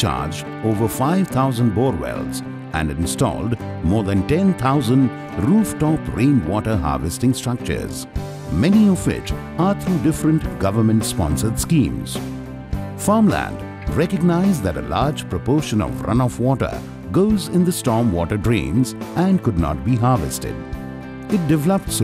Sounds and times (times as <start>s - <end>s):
Speech: 0.0s - 12.2s, 13.0s - 20.6s, 21.3s - 22.0s
Music: 0.0s - 22.0s.